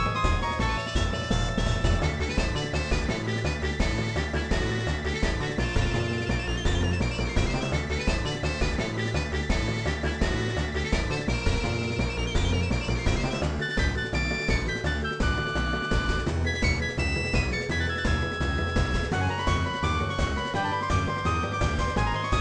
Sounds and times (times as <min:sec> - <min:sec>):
Video game music: 0:00.0 - 0:22.4.